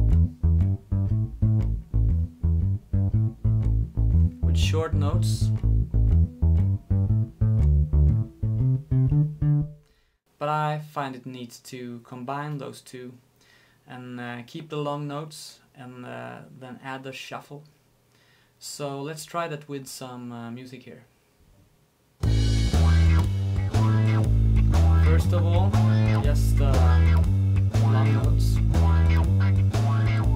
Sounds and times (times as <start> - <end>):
Bass guitar: 0.0 - 9.9, 22.2 - 30.3
Speech: 4.4 - 5.6, 10.4 - 13.2, 13.9 - 17.8, 18.6 - 21.1, 25.0 - 27.2, 27.8 - 28.7.